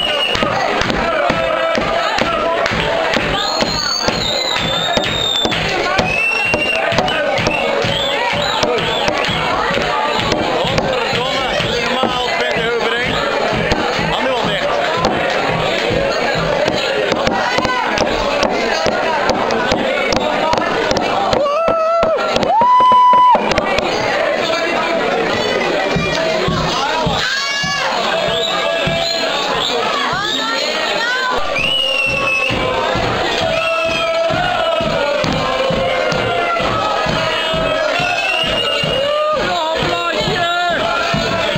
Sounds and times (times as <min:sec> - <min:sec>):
Speech: 0:00.0 - 0:22.2, 0:23.6 - 0:41.5
Music: 0:00.0 - 0:30.7, 0:31.4 - 0:41.5.